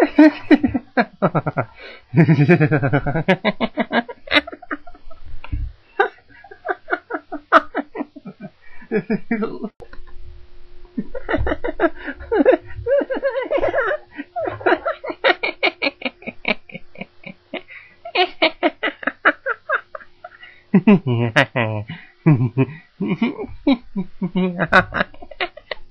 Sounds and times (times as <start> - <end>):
Laughter: 0.0 - 9.7, 11.0 - 25.9.